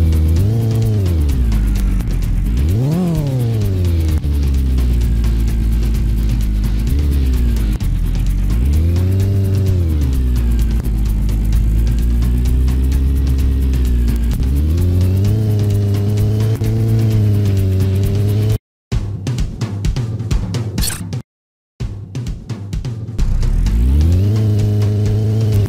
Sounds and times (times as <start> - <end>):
Car: 0.0 - 18.6, 23.2 - 25.6
Truck: 0.0 - 18.6, 23.2 - 25.6
Music: 0.0 - 21.2, 21.8 - 25.6.